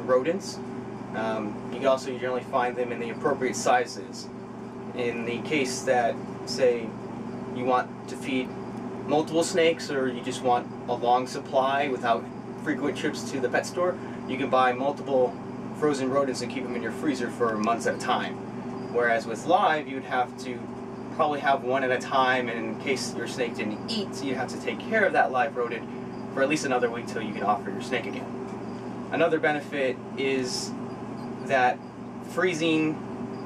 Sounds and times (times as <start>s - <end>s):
Speech: 0.0s - 0.6s, 1.2s - 4.3s, 5.0s - 7.0s, 7.6s - 8.5s, 9.1s - 20.6s, 21.2s - 28.3s, 29.1s - 30.8s, 31.5s - 33.0s.